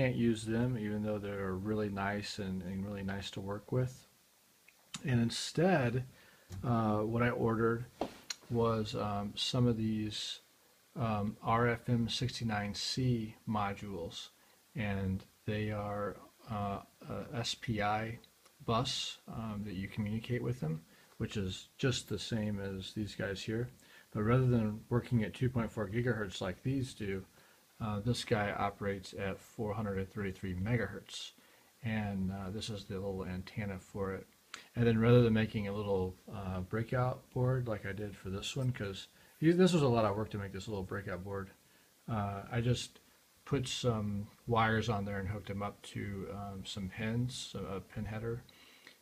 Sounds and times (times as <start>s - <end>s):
Speech: 0.0s - 4.1s, 4.9s - 49.0s.